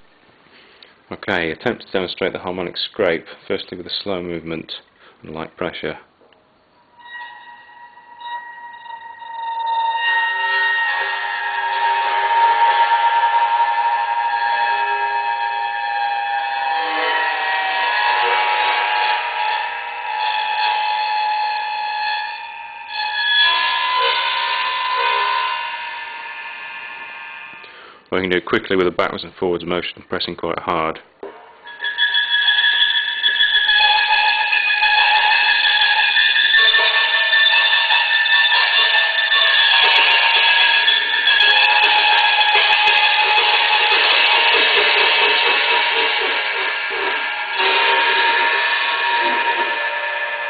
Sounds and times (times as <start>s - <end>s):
Speech: 1.1s - 6.1s, 28.1s - 31.1s.